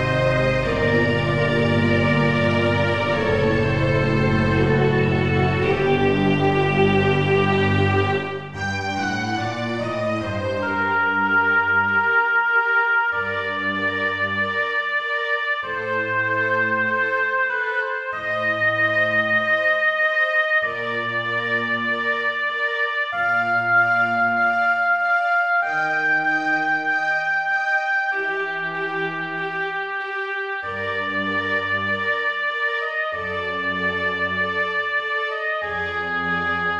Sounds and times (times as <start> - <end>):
Music: 0.0 - 36.7.